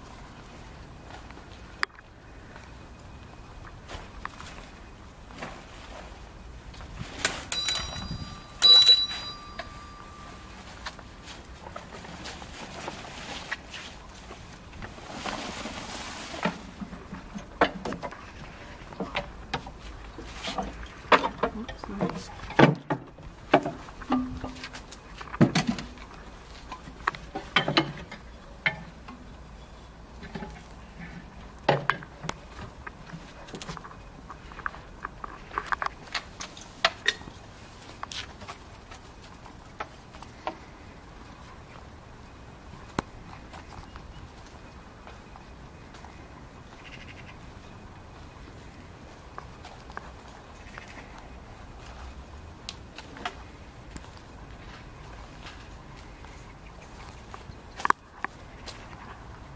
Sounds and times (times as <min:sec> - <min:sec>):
Outside, urban or manmade: 0:00.0 - 0:59.5.